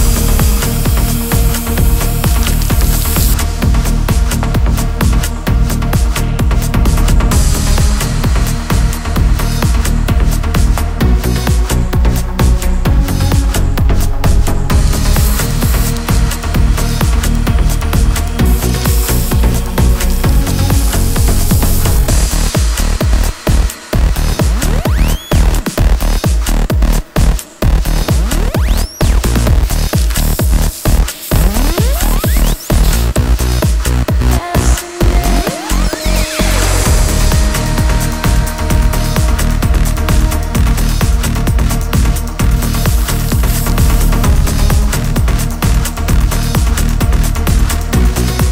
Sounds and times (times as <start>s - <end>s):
Electronic music: 0.0s - 48.5s.